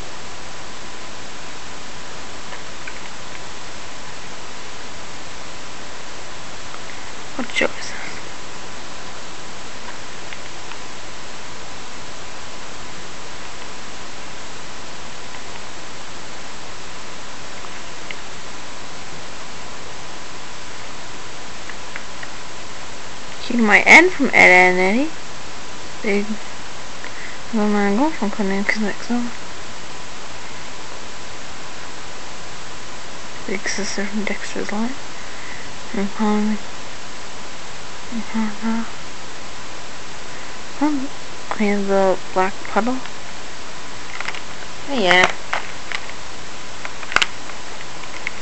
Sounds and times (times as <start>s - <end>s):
Inside, small room: 0.0s - 48.4s
Speech: 7.4s - 8.3s, 23.4s - 25.2s, 26.0s - 26.4s, 27.5s - 29.4s, 33.4s - 35.0s, 35.9s - 36.6s, 38.1s - 39.0s, 40.8s - 43.1s, 44.8s - 45.4s.